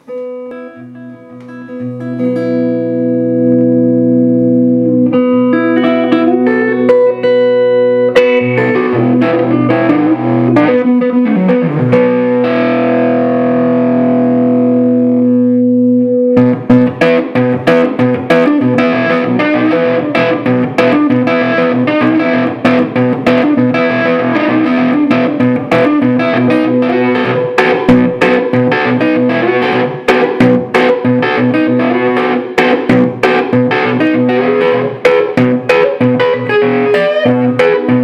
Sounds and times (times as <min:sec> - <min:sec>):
Music: 0:00.0 - 0:38.0.